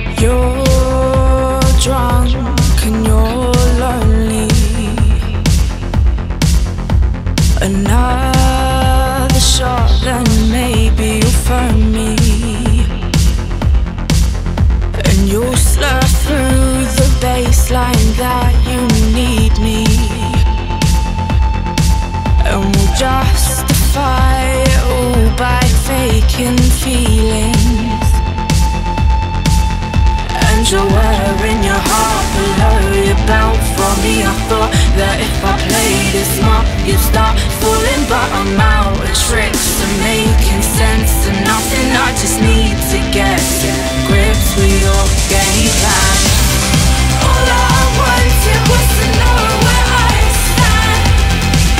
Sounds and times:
Music: 0:00.0 - 0:51.7.

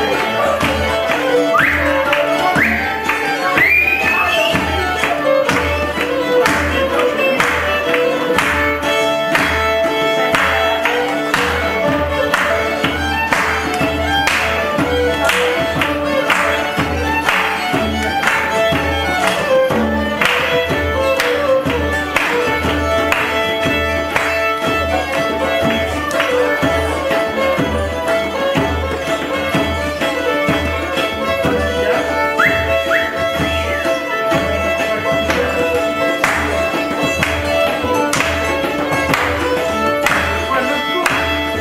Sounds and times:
Traditional music: 0:00.0 - 0:41.6.

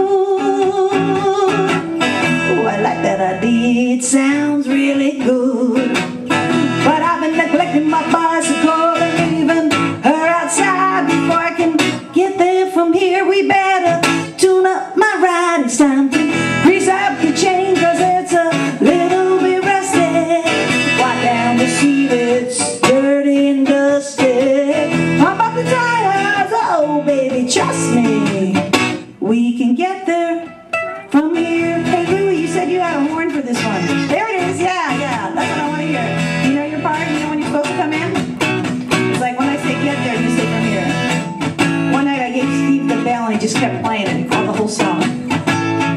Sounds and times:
Music: 0:00.0 - 0:45.9.

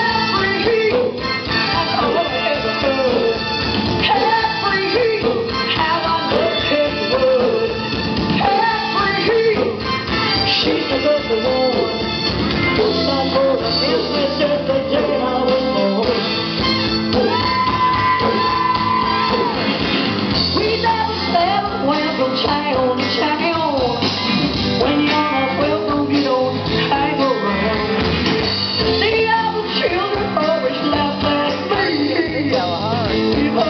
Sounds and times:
Female singing: 0:00.0 - 0:03.4, 0:04.1 - 0:07.7, 0:08.4 - 0:09.8, 0:10.5 - 0:12.0, 0:12.8 - 0:16.2, 0:20.6 - 0:24.0, 0:24.8 - 0:28.0, 0:29.0 - 0:33.6
Music: 0:00.0 - 0:33.6.

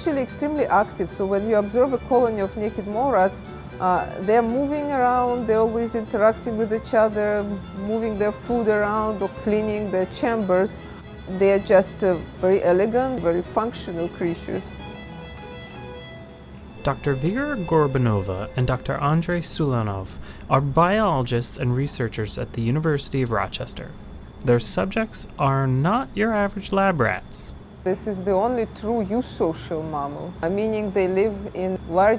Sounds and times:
Speech: 0:00.0 - 0:14.6, 0:16.8 - 0:32.1.

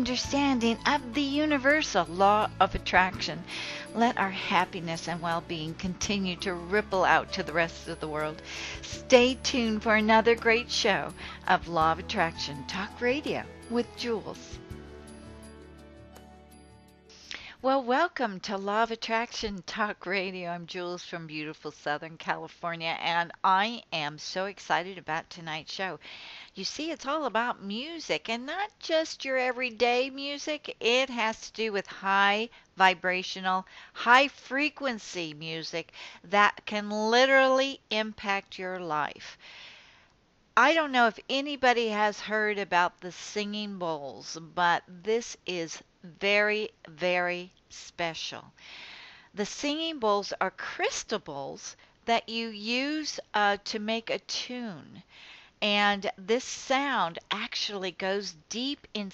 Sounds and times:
Speech: 0:00.0 - 0:14.5, 0:17.6 - 0:26.0, 0:26.6 - 0:39.4, 0:40.6 - 0:48.5, 0:49.4 - 0:55.0, 0:55.6 - 0:59.1
Music: 0:00.0 - 0:17.8.

